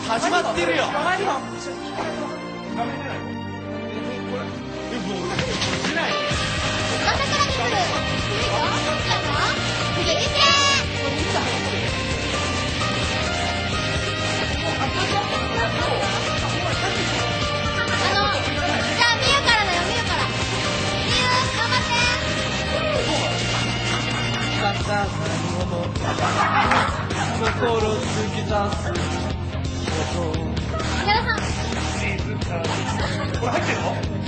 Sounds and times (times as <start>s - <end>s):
Music: 0.0s - 34.2s.